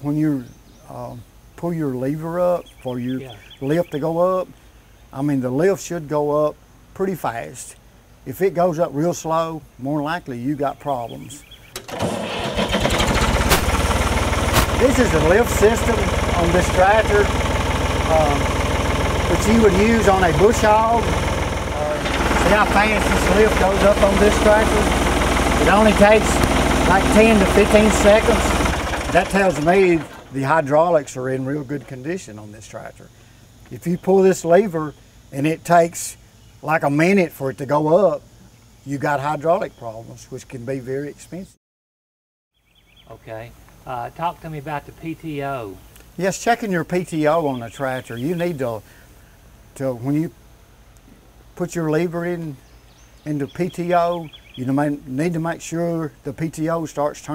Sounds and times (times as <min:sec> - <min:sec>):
Speech: 0:00.0 - 0:04.5, 0:05.1 - 0:11.4, 0:14.8 - 0:17.3, 0:18.1 - 0:18.5, 0:19.3 - 0:21.1, 0:21.8 - 0:25.0, 0:25.6 - 0:33.1, 0:33.7 - 0:38.2, 0:38.9 - 0:41.6, 0:43.1 - 0:48.8, 0:49.8 - 0:50.4, 0:51.6 - 0:52.6, 0:53.2 - 0:57.3
Vehicle: 0:11.7 - 0:32.0.